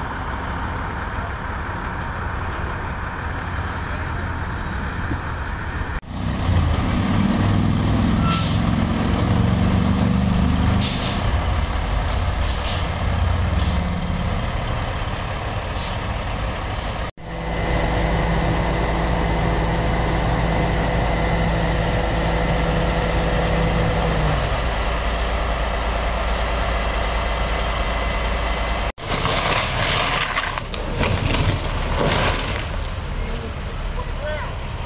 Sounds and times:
Speech: 0:33.2 - 0:34.6.

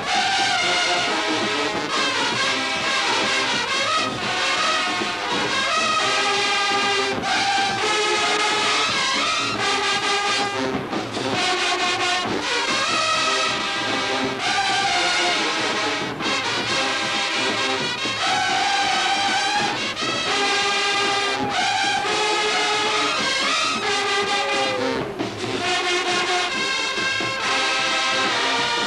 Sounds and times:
Music: 0:00.0 - 0:28.8.

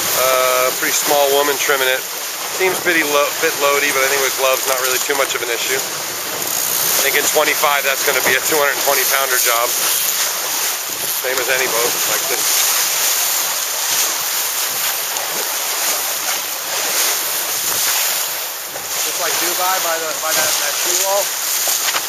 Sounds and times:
Sailboat, sailing ship: 0:00.0 - 0:22.0
Speech: 0:00.2 - 0:02.0, 0:02.6 - 0:05.8, 0:06.9 - 0:09.7, 0:11.2 - 0:12.4, 0:19.1 - 0:21.3.

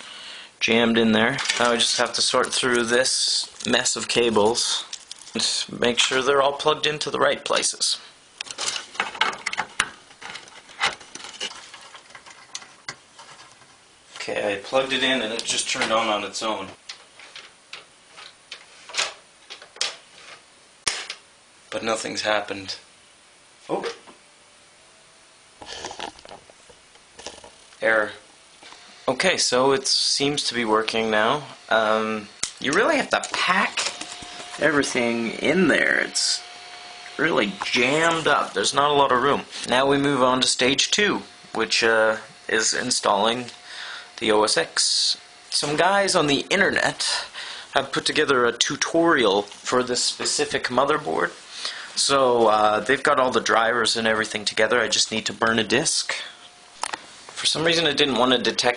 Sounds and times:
Inside, small room: 0:00.0 - 0:58.7
Speech: 0:00.6 - 0:08.1, 0:14.2 - 0:16.8, 0:21.7 - 0:22.9, 0:23.7 - 0:24.1, 0:27.8 - 0:28.2, 0:29.1 - 0:33.9, 0:34.6 - 0:36.5, 0:37.2 - 0:43.6, 0:44.2 - 0:51.4, 0:52.0 - 0:56.4, 0:57.4 - 0:58.7.

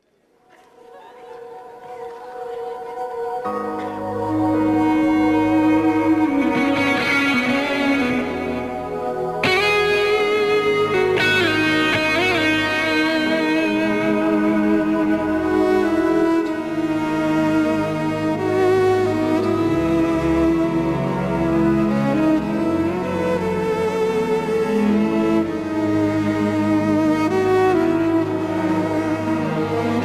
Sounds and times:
Violin, fiddle: 0:04.1 - 0:30.0.

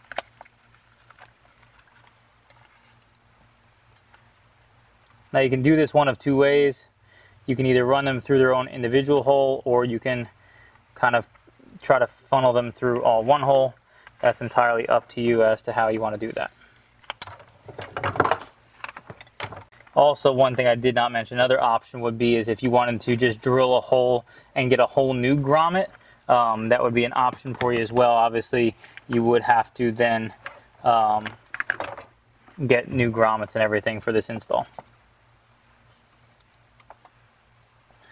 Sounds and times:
Speech: 0:05.3 - 0:10.4, 0:11.0 - 0:16.6, 0:20.0 - 0:31.4, 0:32.6 - 0:34.8.

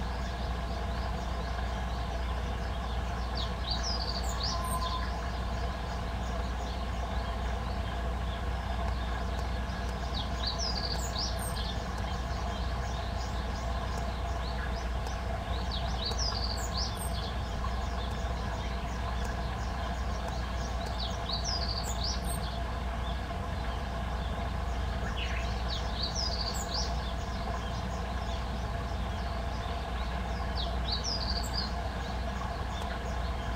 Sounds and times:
Bird: 0:00.0 - 0:33.5.

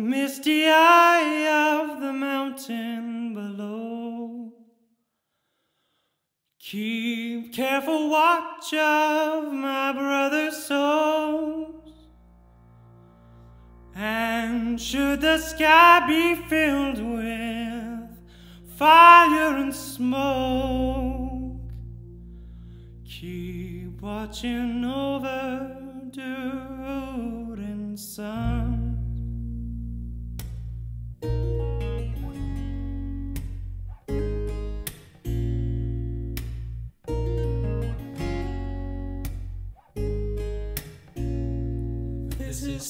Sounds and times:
Music: 0:11.1 - 0:27.7, 0:28.4 - 0:42.8.

